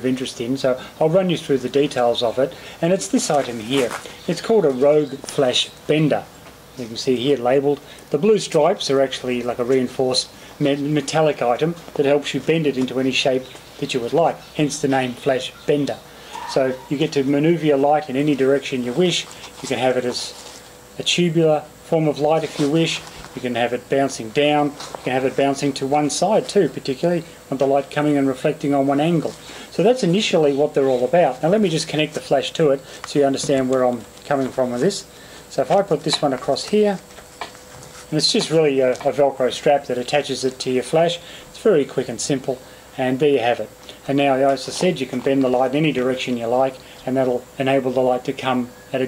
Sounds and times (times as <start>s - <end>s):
Speech: 0.0s - 20.4s, 21.0s - 37.1s, 38.1s - 49.0s.